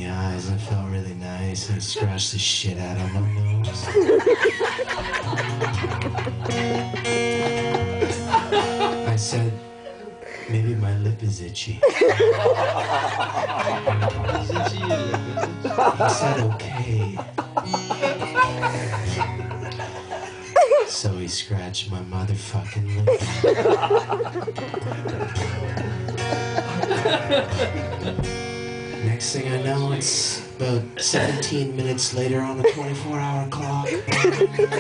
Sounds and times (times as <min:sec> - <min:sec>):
Speech: 0:00.0 - 0:03.9, 0:09.1 - 0:09.6, 0:10.5 - 0:11.9, 0:14.1 - 0:17.3, 0:20.9 - 0:23.2, 0:29.0 - 0:34.0
Music: 0:00.0 - 0:34.8
Chuckle, chortle: 0:03.0 - 0:09.2, 0:11.8 - 0:20.9, 0:22.7 - 0:28.4, 0:33.8 - 0:34.8.